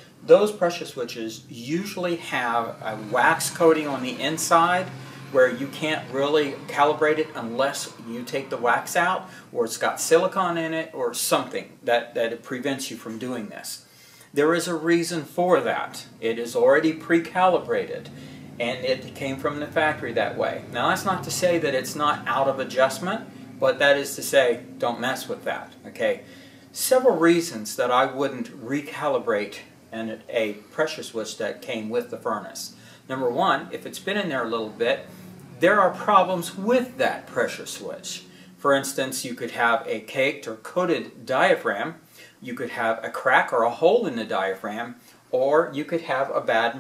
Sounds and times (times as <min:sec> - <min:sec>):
Speech: 0:00.2 - 0:46.8.